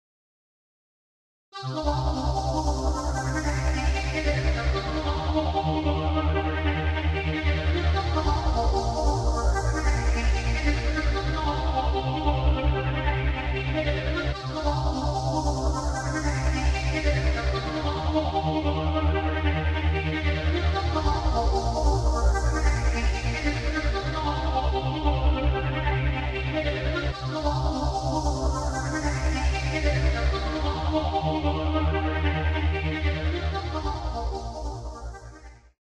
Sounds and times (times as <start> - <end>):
Music: 1.6 - 35.8.